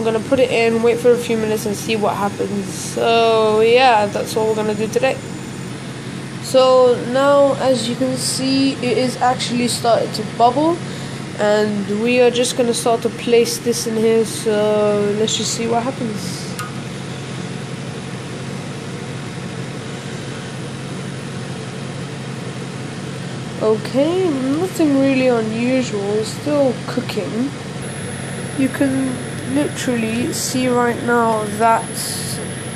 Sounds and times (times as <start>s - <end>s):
Speech: 0.0s - 5.2s, 6.4s - 16.6s, 23.6s - 27.6s, 28.6s - 32.4s.